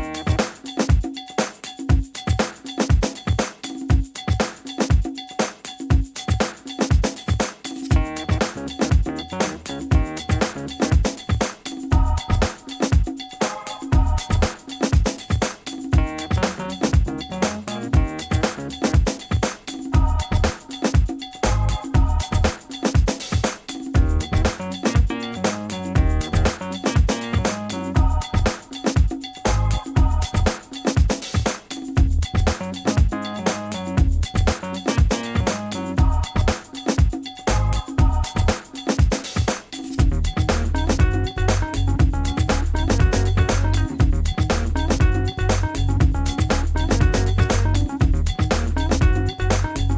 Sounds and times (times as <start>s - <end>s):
Music: 0.0s - 49.9s.